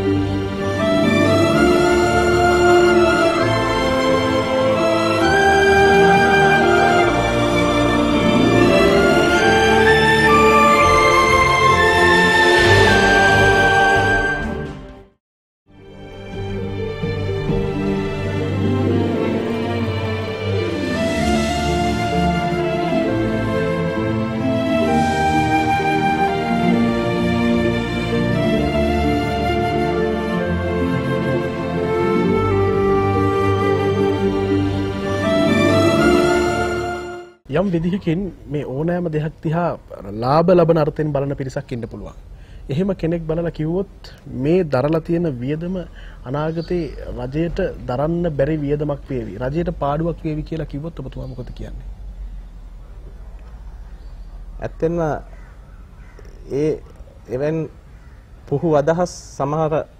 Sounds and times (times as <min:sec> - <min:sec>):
Sad music: 0:00.0 - 0:37.4.